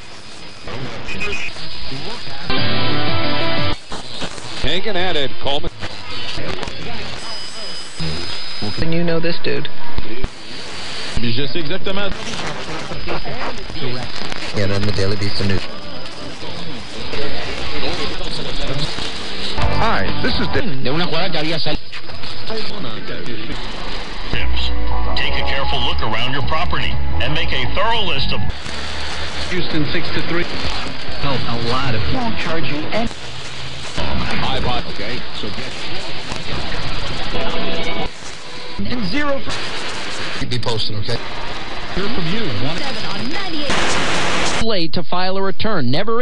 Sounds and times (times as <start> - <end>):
Radio: 0.0 - 46.2
Speech: 11.2 - 15.7, 16.4 - 23.6, 34.2 - 35.8, 40.4 - 41.2.